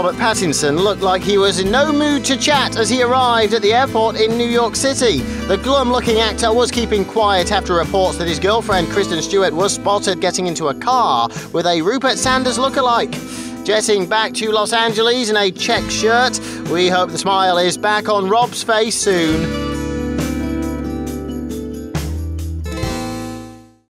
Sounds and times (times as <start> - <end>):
Speech: 0.0 - 19.5
Music: 0.0 - 23.9.